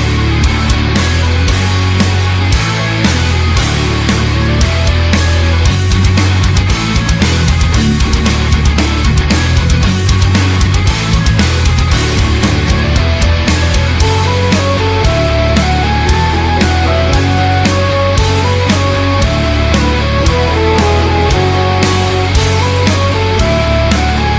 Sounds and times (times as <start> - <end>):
Rock music: 0.0 - 24.3.